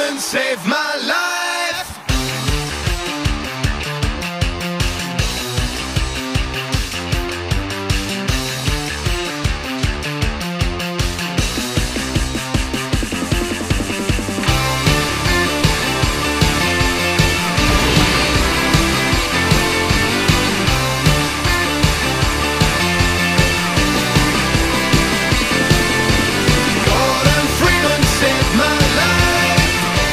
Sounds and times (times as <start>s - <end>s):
Music: 0.0s - 30.1s.